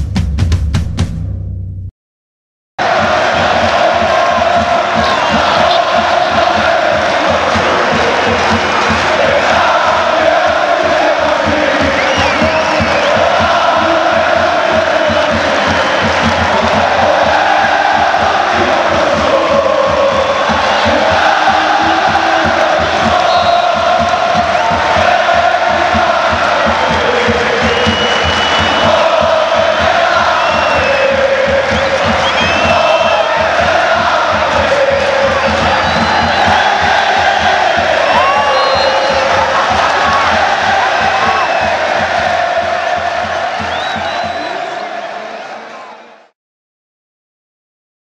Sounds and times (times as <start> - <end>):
Music: 0.0 - 1.9, 2.8 - 46.4.